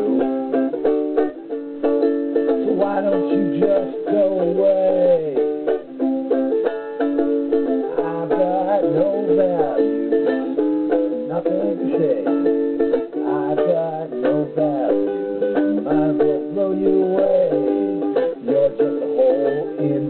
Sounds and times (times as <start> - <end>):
Inside, small room: 0.0 - 20.1
Ukulele: 0.0 - 20.1.